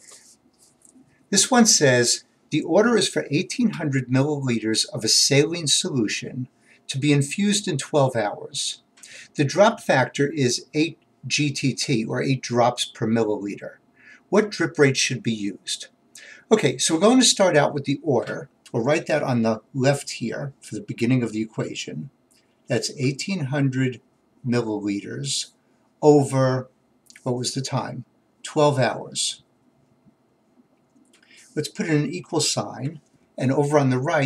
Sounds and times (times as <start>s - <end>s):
Speech: 1.3s - 29.5s, 31.5s - 34.2s.